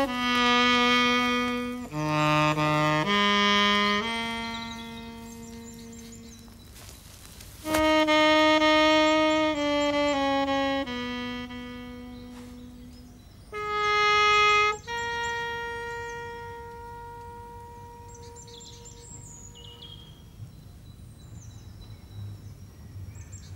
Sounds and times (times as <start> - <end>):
Music: 0.0 - 6.2, 7.6 - 18.9
Outside, rural or natural: 0.0 - 23.5.